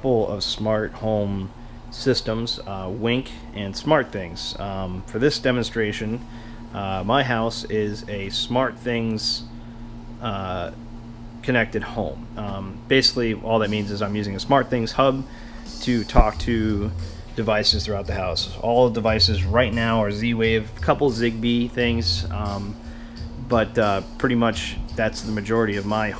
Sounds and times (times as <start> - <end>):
Speech: 0.0 - 6.2, 6.8 - 9.5, 10.2 - 10.8, 11.4 - 22.8, 23.4 - 26.1
Music: 12.3 - 26.1.